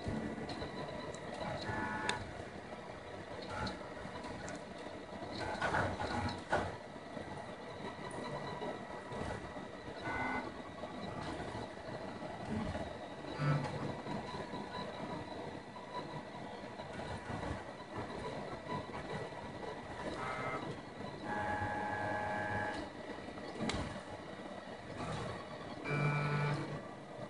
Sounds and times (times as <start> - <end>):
Printer: 0.0 - 27.3.